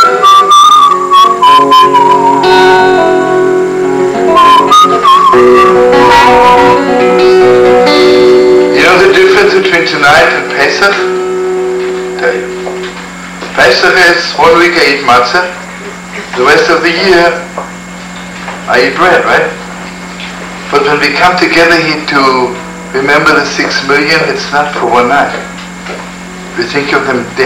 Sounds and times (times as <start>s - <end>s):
Music: 0.0s - 13.1s, 21.7s - 24.2s
Speech: 8.8s - 11.0s, 13.6s - 17.5s, 18.7s - 19.6s, 20.7s - 25.5s, 26.6s - 27.4s.